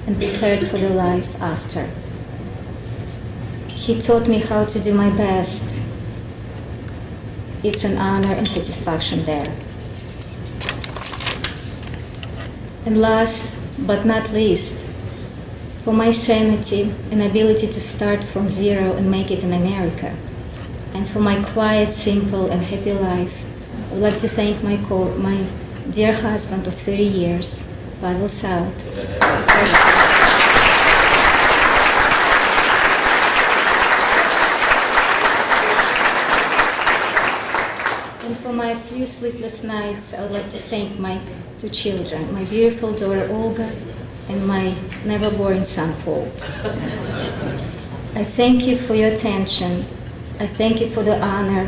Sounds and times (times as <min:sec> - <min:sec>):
Female speech, woman speaking: 0:00.0 - 0:02.0, 0:03.7 - 0:05.9, 0:07.6 - 0:09.6, 0:12.8 - 0:14.9, 0:15.8 - 0:20.2, 0:20.9 - 0:28.8, 0:29.5 - 0:30.0, 0:38.2 - 0:46.4, 0:48.2 - 0:51.6.